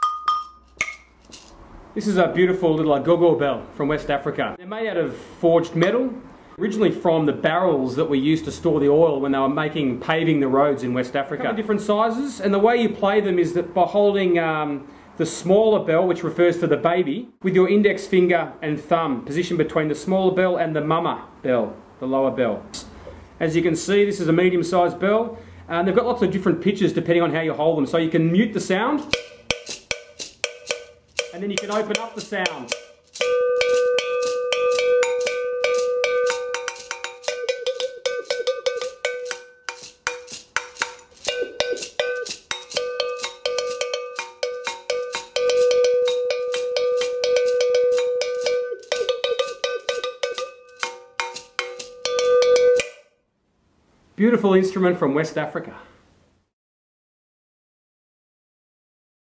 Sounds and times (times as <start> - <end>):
Percussion: 0.0 - 2.5, 28.3 - 53.2
Speech: 2.0 - 22.8, 23.4 - 29.1, 31.3 - 32.7, 54.2 - 56.0.